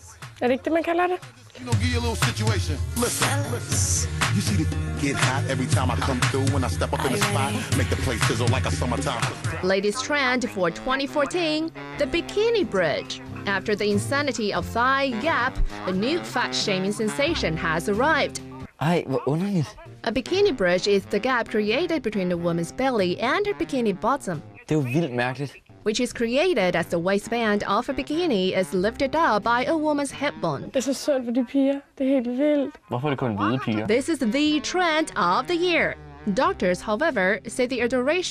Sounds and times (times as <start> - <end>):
Music: 0.0 - 30.8, 33.0 - 38.3
Speech: 5.1 - 38.3.